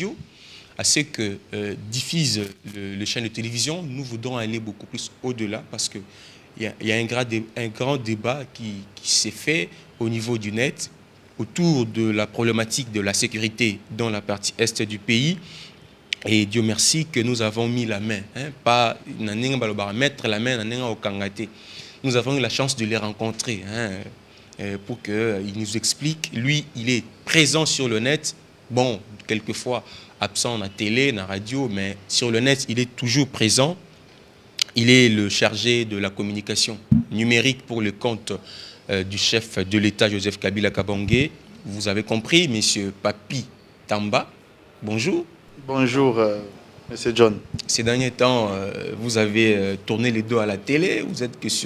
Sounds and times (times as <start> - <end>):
Speech: 0.0 - 15.4, 16.2 - 33.8, 34.6 - 51.6.